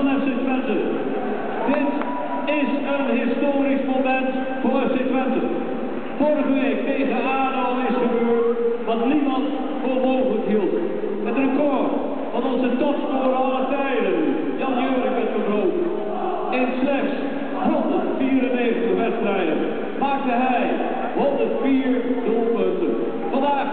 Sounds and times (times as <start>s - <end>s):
Speech: 0.0s - 1.0s, 1.7s - 5.6s, 6.2s - 23.7s.